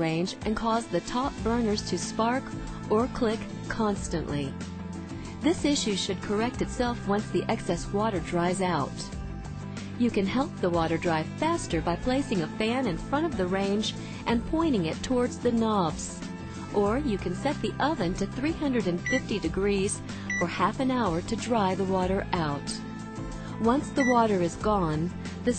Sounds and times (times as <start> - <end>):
Speech: 0.0 - 4.6, 5.4 - 9.1, 10.0 - 22.8, 23.6 - 25.5
Music: 0.0 - 25.5.